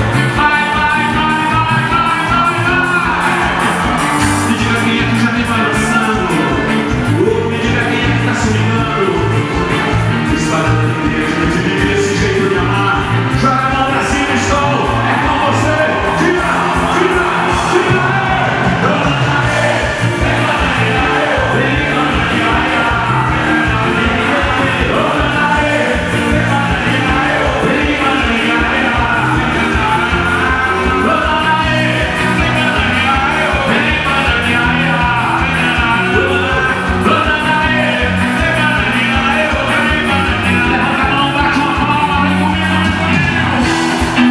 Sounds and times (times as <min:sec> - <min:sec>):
Music: 0:00.0 - 0:44.3.